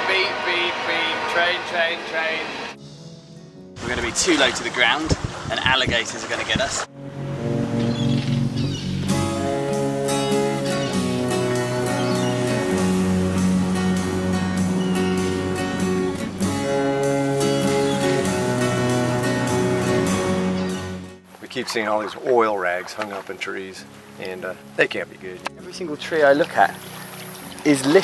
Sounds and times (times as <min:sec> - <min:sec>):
Speech: 0:00.0 - 0:02.6, 0:03.8 - 0:06.9, 0:21.4 - 0:26.8, 0:27.6 - 0:28.0
Music: 0:02.7 - 0:05.1, 0:06.9 - 0:28.0.